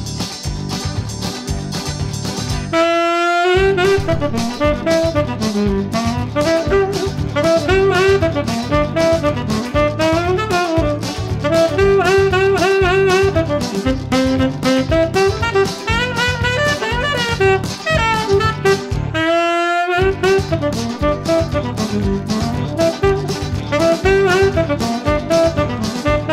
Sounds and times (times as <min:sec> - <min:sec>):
Brass instrument: 0:02.4 - 0:26.3
Saxophone: 0:02.5 - 0:26.3.